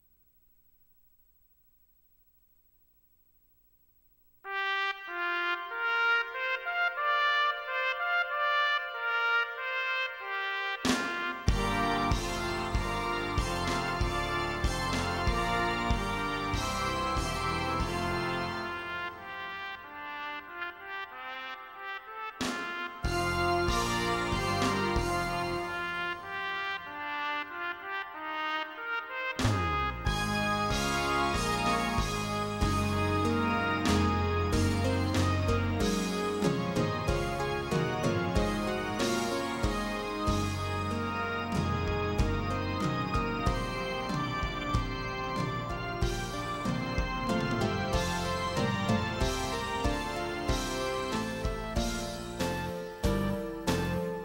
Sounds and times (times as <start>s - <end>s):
Musical instrument: 4.5s - 21.7s, 22.5s - 54.2s.